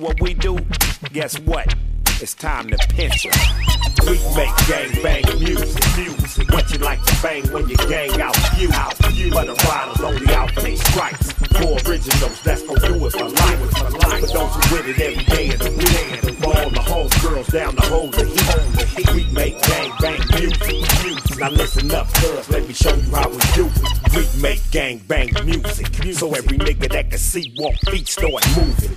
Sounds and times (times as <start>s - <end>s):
Music: 0.0s - 28.9s.